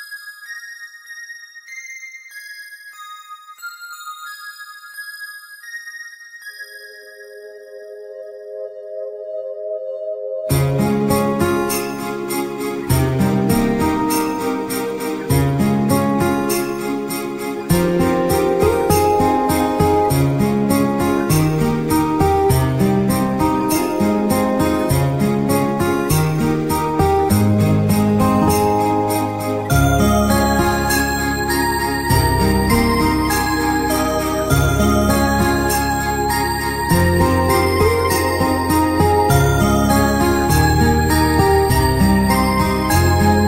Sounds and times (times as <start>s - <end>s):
Music: 0.0s - 43.4s.